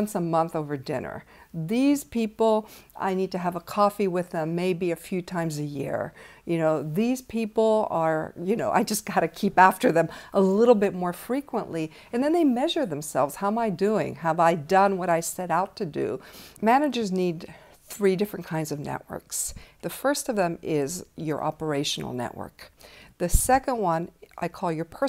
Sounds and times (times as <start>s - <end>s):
Speech: 0.0s - 25.0s.